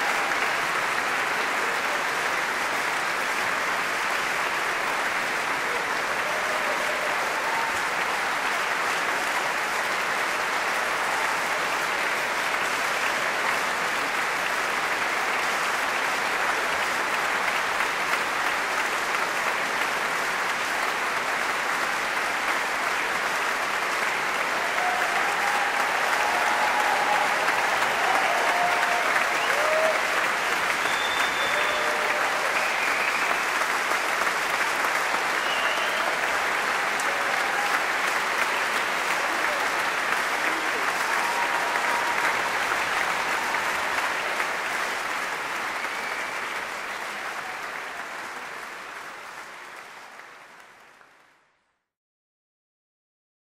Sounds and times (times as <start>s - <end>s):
Applause: 0.0s - 52.0s.